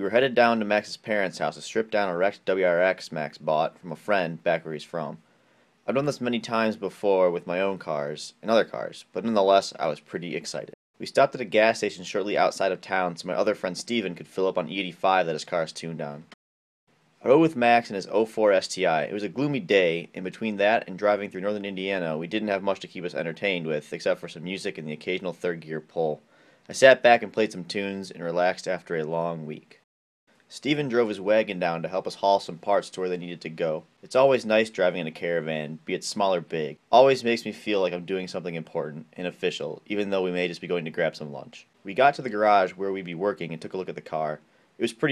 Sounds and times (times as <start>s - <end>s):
Speech: 0.0s - 5.2s, 5.9s - 16.4s, 17.2s - 29.8s, 30.5s - 45.1s.